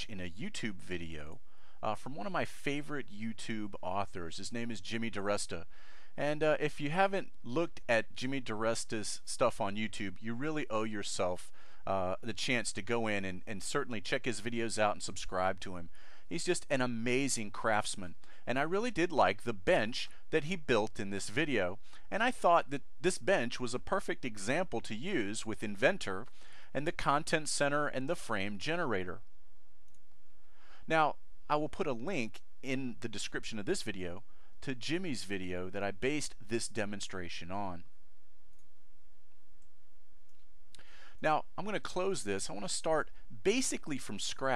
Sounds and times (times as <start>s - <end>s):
Speech: 0.0s - 29.2s, 30.9s - 37.8s, 41.2s - 44.5s.